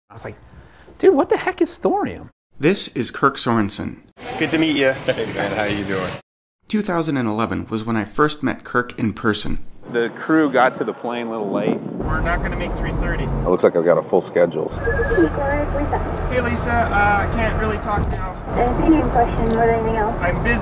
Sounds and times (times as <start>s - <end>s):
Speech: 1.0s - 20.6s.